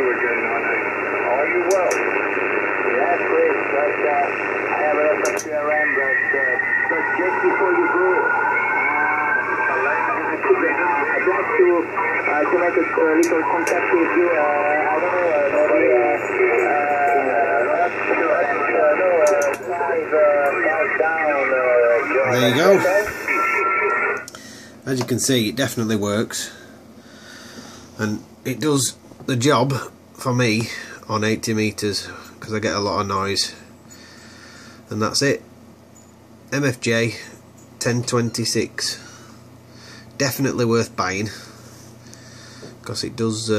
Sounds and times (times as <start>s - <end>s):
Speech: 0.0s - 2.1s, 2.8s - 8.4s, 9.0s - 23.2s, 24.8s - 26.6s, 28.0s - 33.6s, 34.9s - 35.4s, 36.5s - 39.1s, 40.2s - 41.5s, 42.8s - 43.5s
Radio: 0.0s - 25.2s.